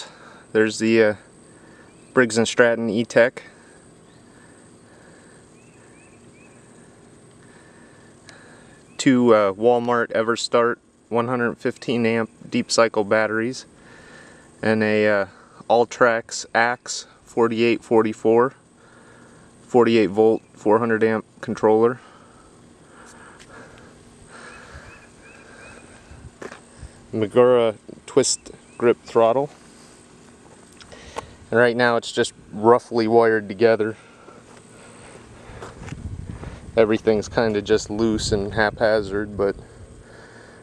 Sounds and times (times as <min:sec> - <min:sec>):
Speech: 0:00.0 - 0:01.2, 0:02.2 - 0:03.5, 0:09.0 - 0:13.7, 0:14.6 - 0:18.6, 0:19.7 - 0:22.0, 0:27.1 - 0:29.6, 0:31.5 - 0:34.0, 0:36.8 - 0:39.6.